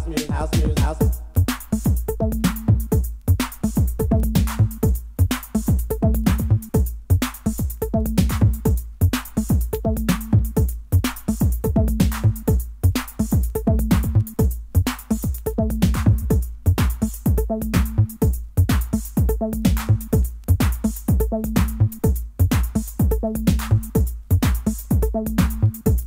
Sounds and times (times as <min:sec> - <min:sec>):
House music: 0:00.0 - 0:26.0.